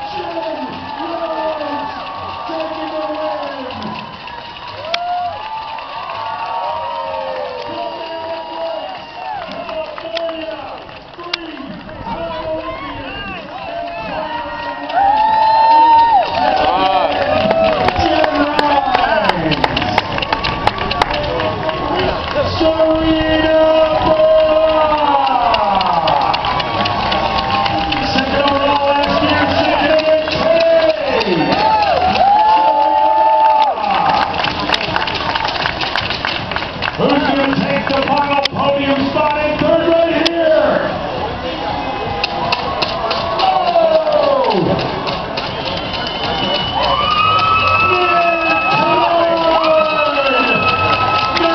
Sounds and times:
Run: 0:00.0 - 0:51.5.

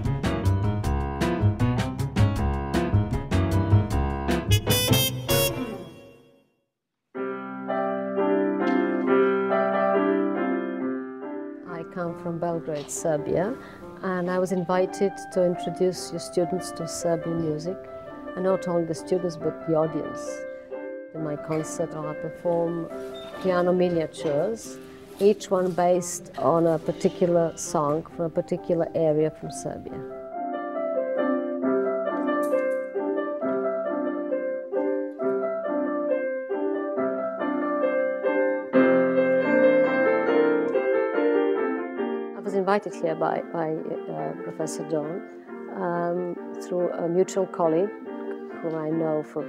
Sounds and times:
Speech: 0:11.7 - 0:17.8, 0:18.4 - 0:20.4, 0:21.2 - 0:30.0, 0:42.4 - 0:47.9, 0:48.6 - 0:49.4.

